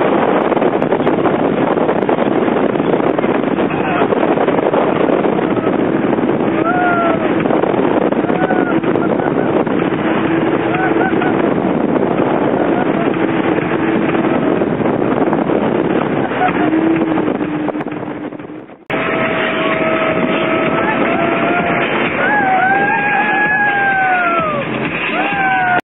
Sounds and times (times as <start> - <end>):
Motorboat, speedboat: 0.0 - 25.8
Sailboat, sailing ship: 0.0 - 25.8
Music: 18.4 - 25.8.